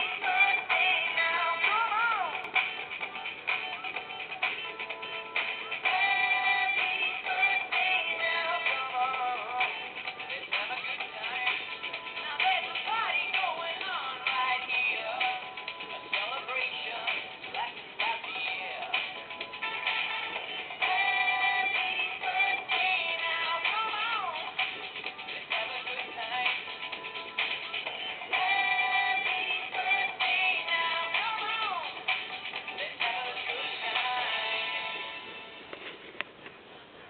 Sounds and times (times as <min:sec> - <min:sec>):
Female singing: 0:00.0 - 0:02.5, 0:05.9 - 0:09.7, 0:10.3 - 0:15.5, 0:20.8 - 0:24.6, 0:28.3 - 0:32.0
Music: 0:00.0 - 0:37.0
Male singing: 0:05.9 - 0:15.4, 0:25.3 - 0:26.6, 0:32.7 - 0:34.8.